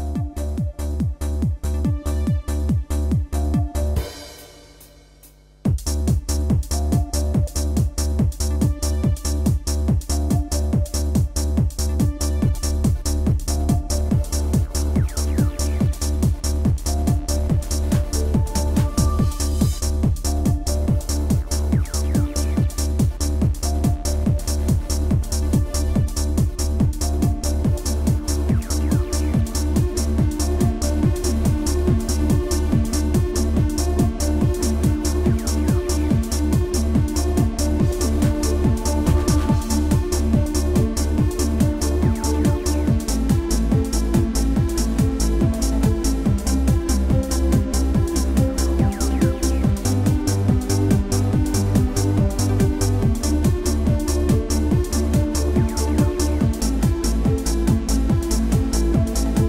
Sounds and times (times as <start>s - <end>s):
Techno: 0.0s - 59.4s.